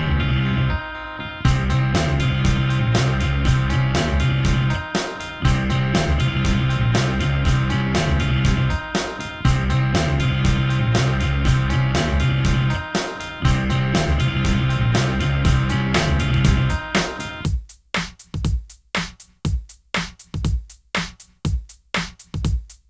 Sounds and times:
Music: 0:00.0 - 0:22.8.

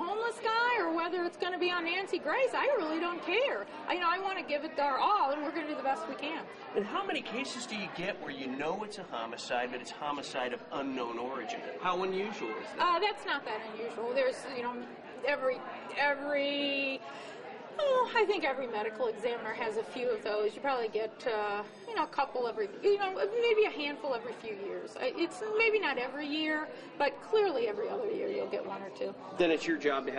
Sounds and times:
Female speech, woman speaking: 0:00.0 - 0:07.1, 0:12.8 - 0:17.1, 0:17.8 - 0:29.3.

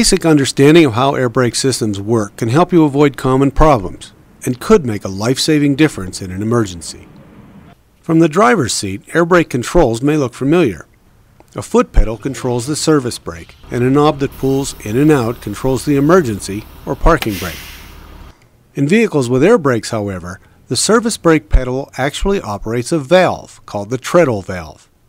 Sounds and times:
Speech: 0:00.0 - 0:07.1, 0:08.1 - 0:10.9, 0:11.5 - 0:17.6, 0:18.8 - 0:24.9.

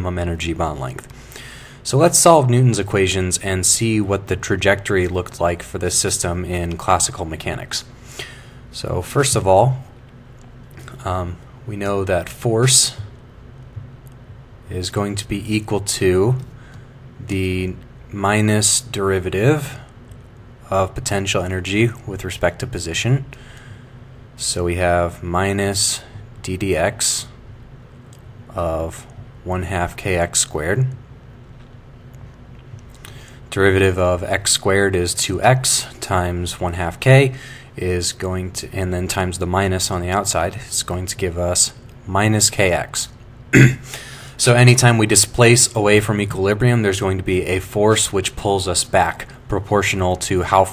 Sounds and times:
Speech: 0:00.0 - 0:01.1, 0:01.8 - 0:07.9, 0:08.7 - 0:10.0, 0:10.9 - 0:13.1, 0:14.6 - 0:16.5, 0:17.2 - 0:19.9, 0:20.6 - 0:23.4, 0:24.4 - 0:27.4, 0:28.5 - 0:31.0, 0:33.5 - 0:43.8, 0:44.4 - 0:50.7.

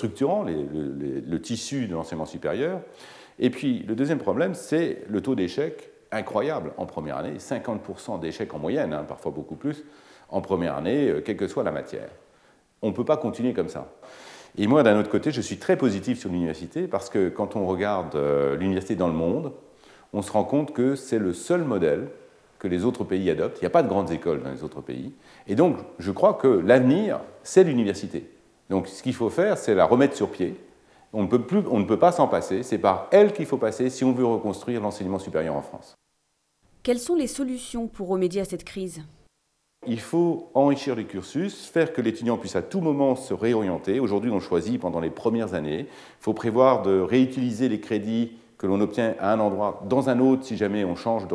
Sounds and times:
Speech: 0:00.0 - 0:12.2, 0:12.8 - 0:14.0, 0:14.6 - 0:36.0, 0:36.8 - 0:39.2, 0:39.8 - 0:51.3.

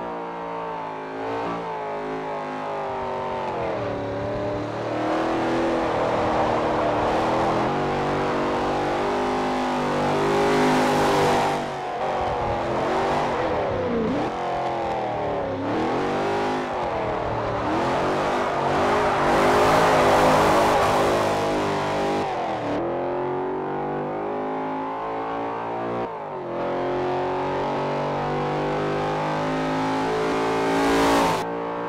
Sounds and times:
Car: 0:00.0 - 0:31.8.

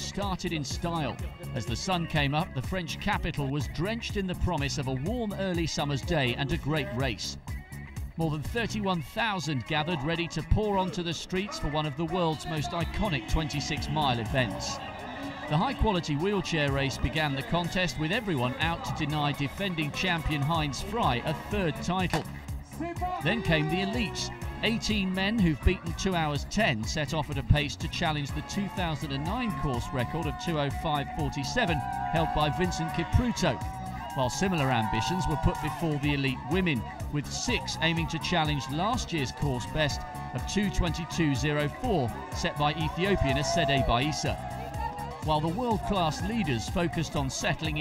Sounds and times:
Speech: 0:00.0 - 0:07.4, 0:08.2 - 0:33.6, 0:34.2 - 0:44.4, 0:45.2 - 0:47.8
Music: 0:00.0 - 0:47.8
Outside, urban or manmade: 0:00.0 - 0:47.8.

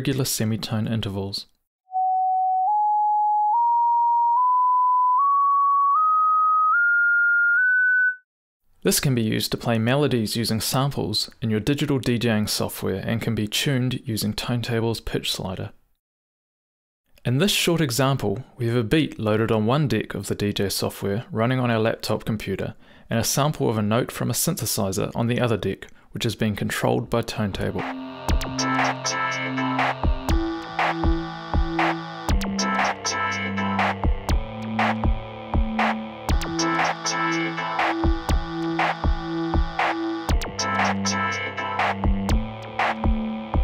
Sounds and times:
Speech: 0:00.0 - 0:01.6, 0:08.8 - 0:15.8, 0:17.2 - 0:27.9.

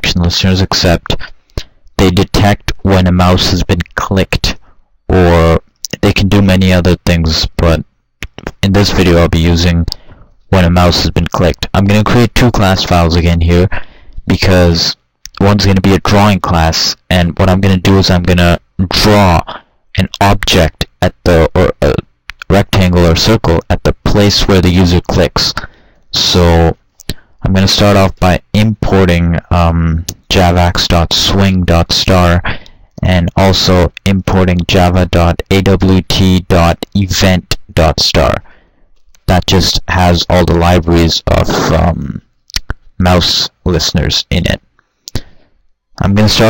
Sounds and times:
Speech: 0:00.0 - 0:01.4, 0:02.0 - 0:38.5, 0:39.2 - 0:45.3, 0:46.0 - 0:46.4.

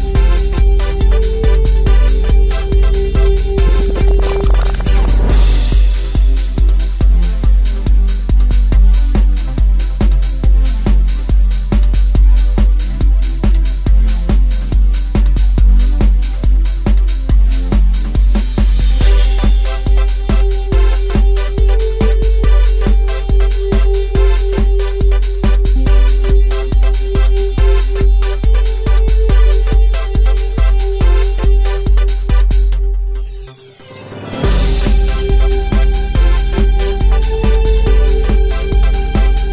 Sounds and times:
Music: 0:00.0 - 0:39.5.

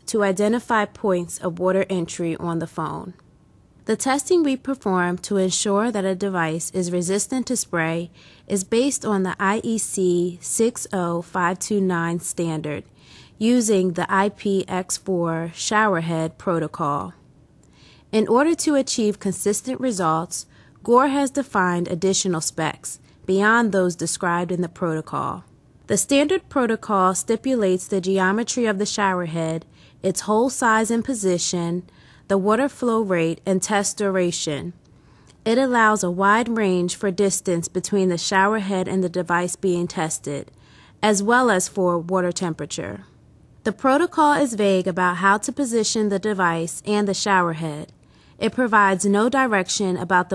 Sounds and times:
Speech: 0:00.0 - 0:03.2, 0:03.9 - 0:17.2, 0:18.1 - 0:34.8, 0:35.4 - 0:43.1, 0:43.7 - 0:50.3.

